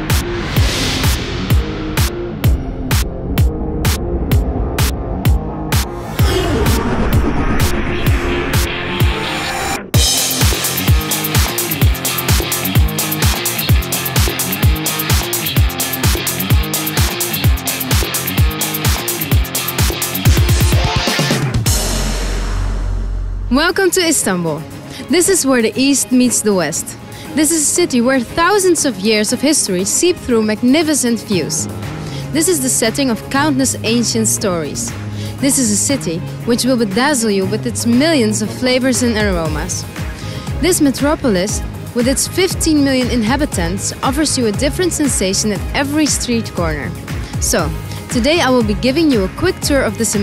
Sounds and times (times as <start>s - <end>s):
Music: 0.0s - 50.2s
Speech: 23.5s - 31.7s, 32.4s - 39.8s, 40.6s - 50.2s.